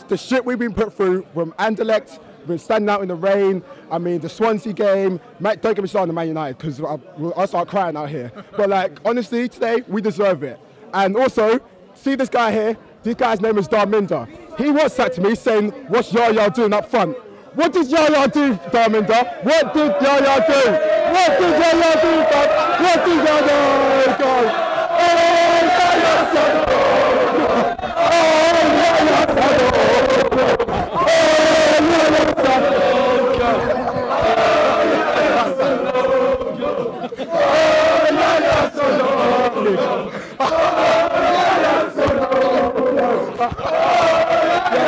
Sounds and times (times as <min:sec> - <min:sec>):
Speech: 0:00.0 - 0:24.5
Outside, urban or manmade: 0:00.0 - 0:44.8.